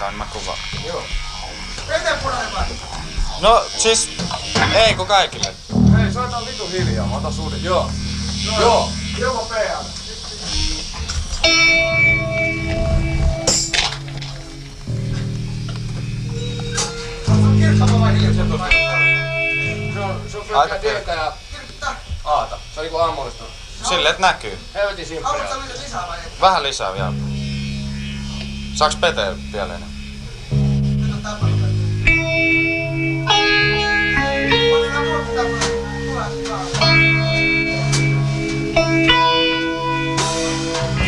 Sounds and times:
Speech: 0.0s - 1.1s, 1.9s - 11.1s, 16.5s - 19.1s, 19.9s - 27.2s, 28.8s - 29.9s, 31.0s - 31.8s, 34.5s - 36.8s
Music: 0.0s - 21.3s, 26.5s - 41.0s.

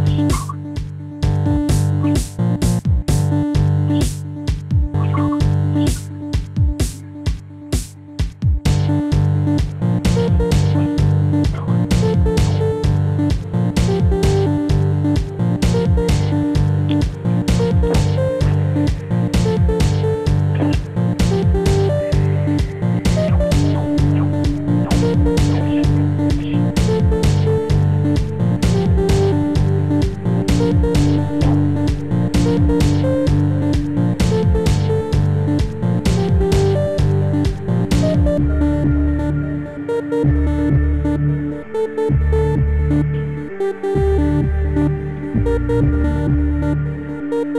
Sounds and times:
Ambient music: 0.0s - 47.5s
Electronica: 0.0s - 47.5s.

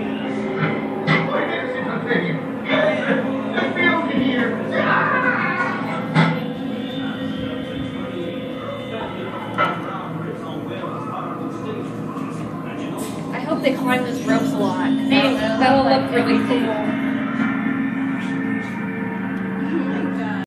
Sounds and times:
Speech: 7.9s - 17.0s.

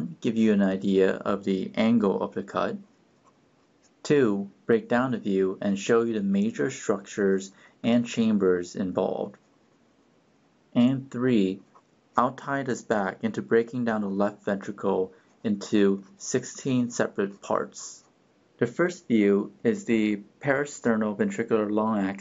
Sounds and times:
Speech: 0.0s - 2.8s, 4.0s - 9.4s, 10.8s - 11.6s, 12.2s - 22.2s.

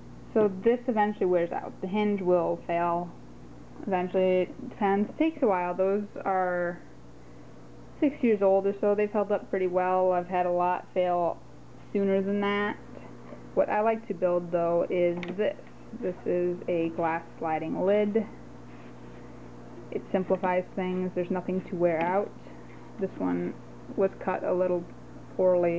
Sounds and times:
Speech: 0.4s - 3.2s, 3.8s - 6.9s, 8.0s - 12.8s, 13.6s - 18.4s, 19.8s - 22.4s, 23.0s - 25.7s.

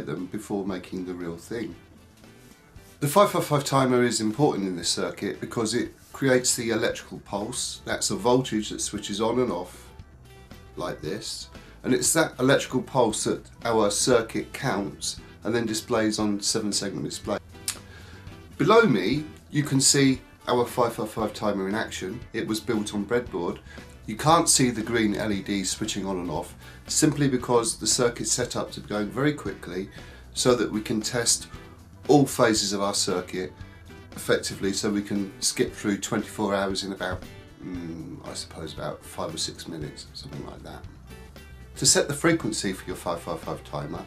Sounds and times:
Speech: 0.0s - 1.8s, 3.0s - 9.9s, 10.8s - 17.4s, 18.6s - 33.6s, 34.2s - 41.0s, 41.8s - 44.0s
Music: 0.0s - 44.0s.

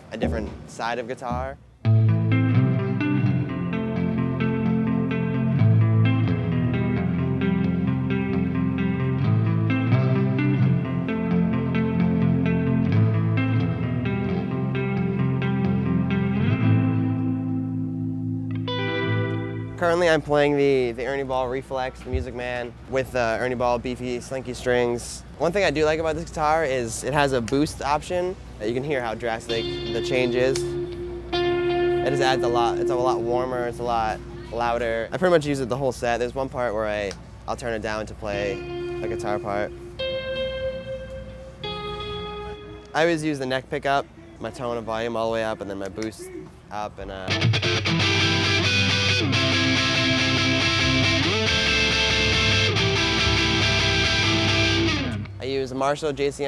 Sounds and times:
Music: 1.3s - 20.3s, 28.9s - 35.2s, 38.3s - 43.6s, 47.1s - 55.7s.

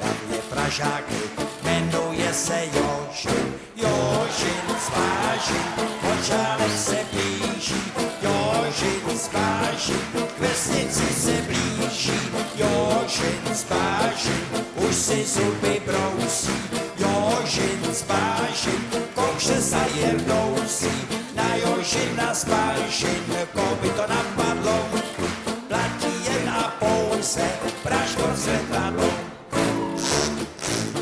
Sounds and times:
Funny music: 0.0s - 31.0s.

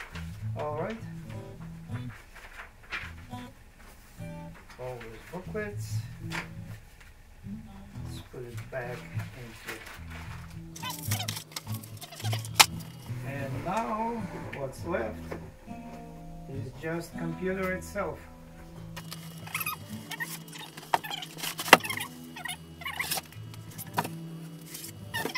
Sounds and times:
Inside, small room: 0.0s - 25.3s
Music: 0.0s - 25.3s
Speech: 0.6s - 2.1s, 4.7s - 6.4s, 7.5s - 10.0s, 13.2s - 15.4s, 16.5s - 18.3s.

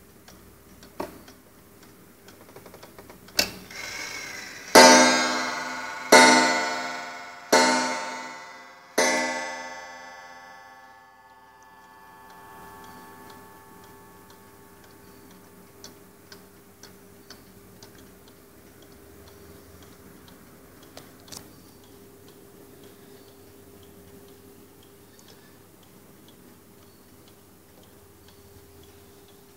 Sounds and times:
Clock: 0.0s - 29.5s.

